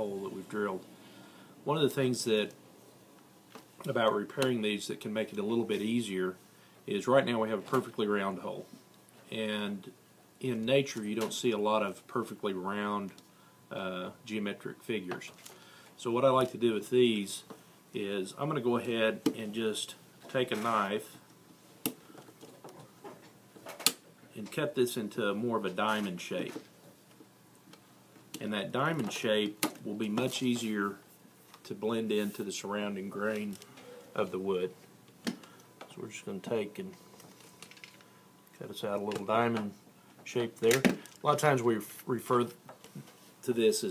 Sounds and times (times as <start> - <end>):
Speech: 0.0 - 0.8, 1.7 - 2.6, 3.8 - 8.7, 9.3 - 15.4, 16.0 - 21.2, 24.3 - 26.6, 28.4 - 31.0, 31.6 - 33.6, 34.2 - 34.8, 35.9 - 37.0, 38.6 - 42.6, 43.4 - 43.9.